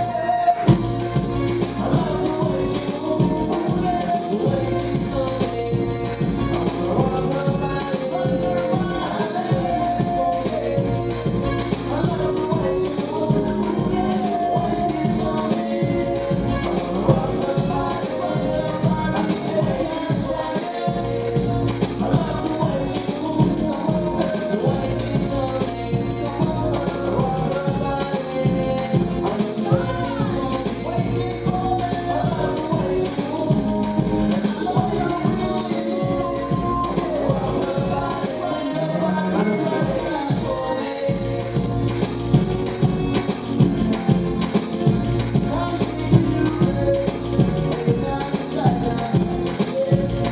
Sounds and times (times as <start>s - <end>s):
Maraca: 0.0s - 50.3s
Music of Latin America: 0.0s - 50.3s.